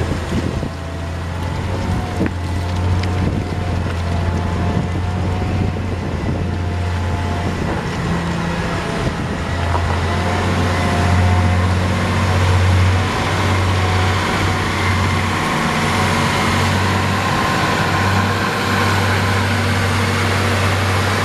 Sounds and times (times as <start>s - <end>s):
Vehicle: 0.0s - 21.2s.